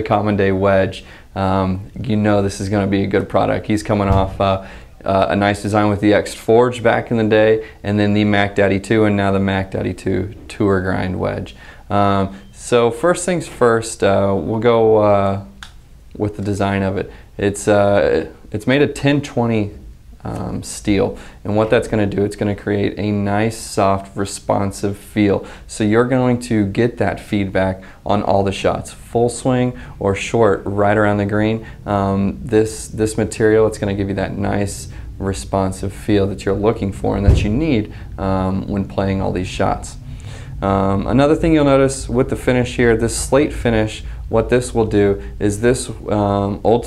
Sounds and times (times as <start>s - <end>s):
Speech: 0.0s - 40.0s, 40.6s - 46.8s.